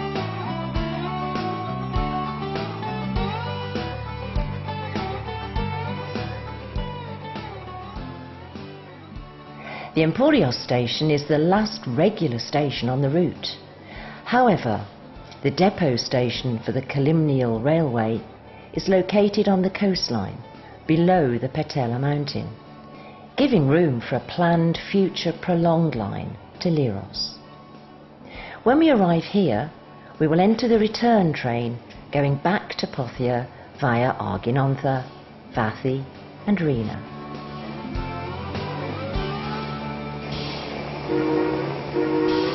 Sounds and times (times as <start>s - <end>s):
Music: 0.0s - 42.5s
Speech: 10.0s - 13.6s, 14.3s - 22.6s, 23.4s - 27.4s, 28.7s - 37.1s.